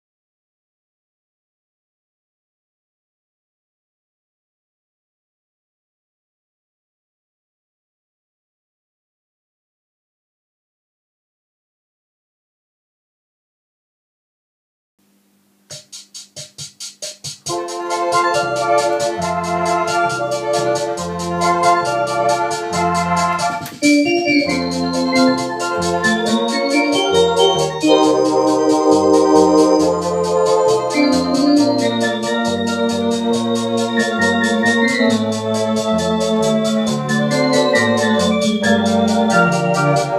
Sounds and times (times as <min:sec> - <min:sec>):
Electronic organ: 0:17.5 - 0:40.1.